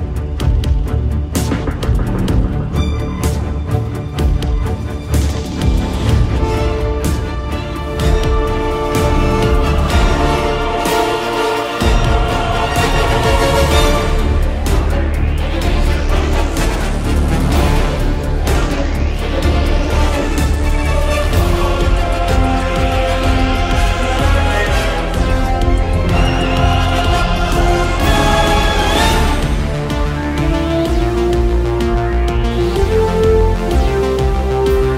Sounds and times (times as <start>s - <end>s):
Exciting music: 0.0s - 34.9s.